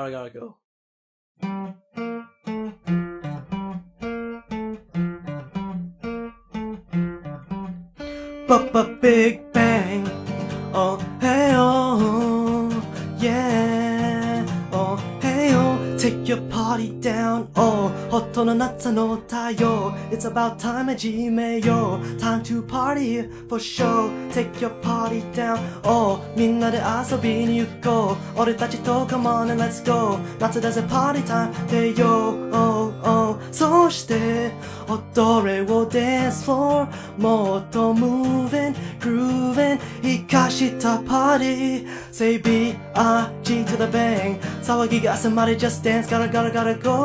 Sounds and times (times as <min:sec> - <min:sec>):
Music: 0:01.4 - 0:47.0.